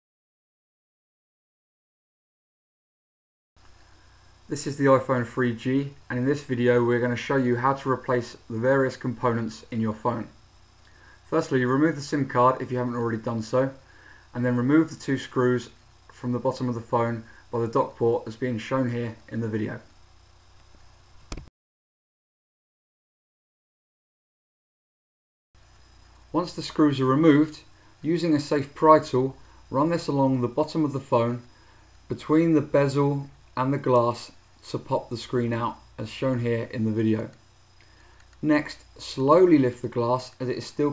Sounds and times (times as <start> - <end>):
Speech: 4.5 - 10.4, 11.2 - 20.0, 26.3 - 31.5, 32.1 - 37.4, 38.4 - 40.9.